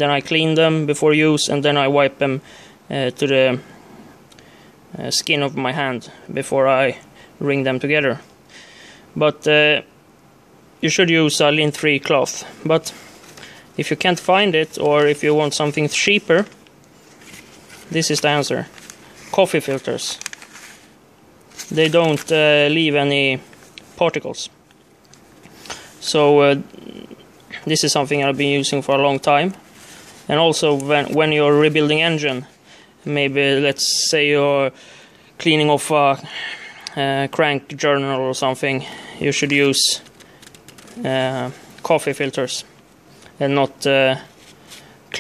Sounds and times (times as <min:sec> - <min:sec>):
Speech: 0:00.0 - 0:03.8, 0:04.9 - 0:08.3, 0:09.2 - 0:09.9, 0:10.8 - 0:13.0, 0:13.8 - 0:16.6, 0:17.9 - 0:18.7, 0:19.3 - 0:20.3, 0:21.7 - 0:24.6, 0:26.0 - 0:29.6, 0:30.3 - 0:34.8, 0:35.4 - 0:36.3, 0:36.9 - 0:40.1, 0:41.0 - 0:42.8, 0:43.4 - 0:44.3
Inside, small room: 0:00.0 - 0:45.2.